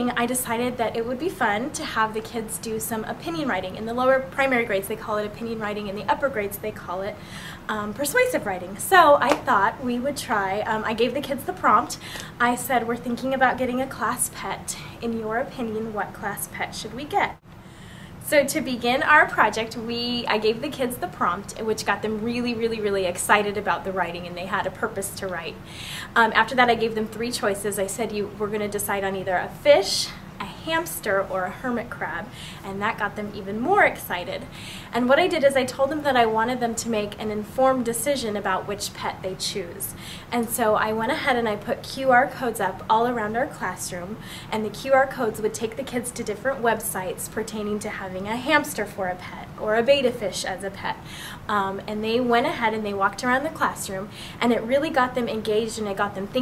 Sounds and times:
Speech: 0.0s - 17.4s, 18.2s - 56.4s.

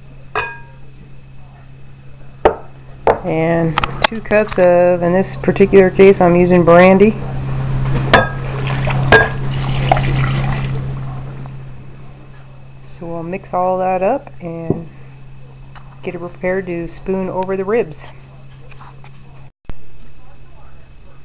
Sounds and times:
Speech: 3.2s - 7.2s, 12.1s - 14.9s, 15.9s - 21.2s.

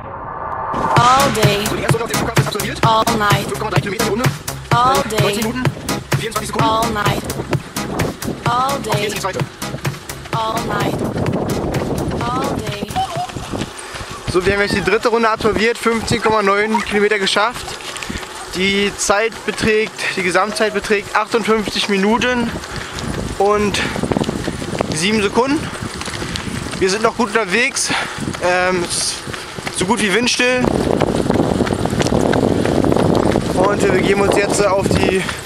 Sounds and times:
Outside, rural or natural: 0.0s - 35.4s
Speech: 1.0s - 7.2s, 8.5s - 9.4s, 10.4s - 11.0s, 12.2s - 12.9s, 14.3s - 17.6s, 18.5s - 22.5s, 29.8s - 30.7s, 33.6s - 35.4s
Run: 1.4s - 35.4s.

